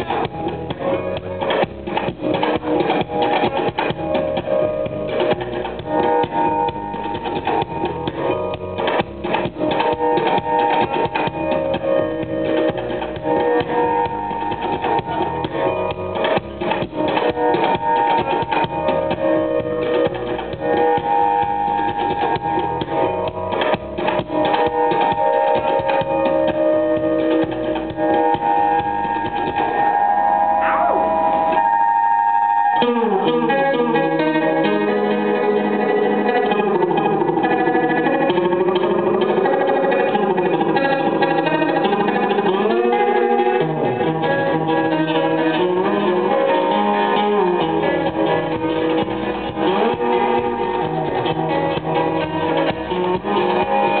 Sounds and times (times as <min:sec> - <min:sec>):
Keyboard (musical): 0:00.0 - 0:54.0.